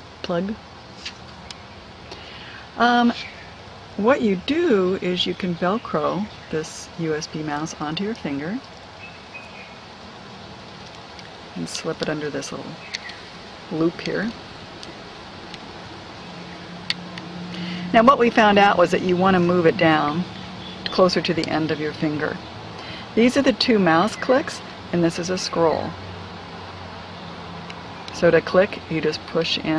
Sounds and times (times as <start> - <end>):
Speech: 0.3 - 0.6, 2.8 - 3.3, 4.0 - 8.6, 11.6 - 12.8, 13.7 - 14.4, 17.8 - 20.3, 20.9 - 22.4, 23.2 - 26.0, 28.2 - 29.7.